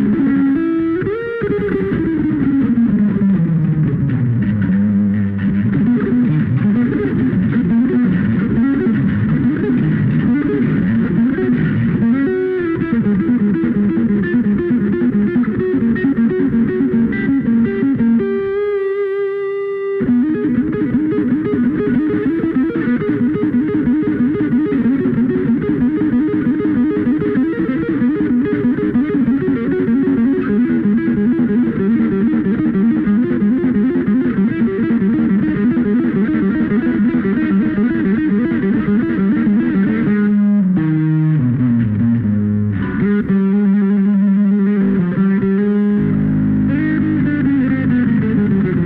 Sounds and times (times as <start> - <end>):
Bass guitar: 0.0 - 48.8
Electric guitar: 0.0 - 48.8.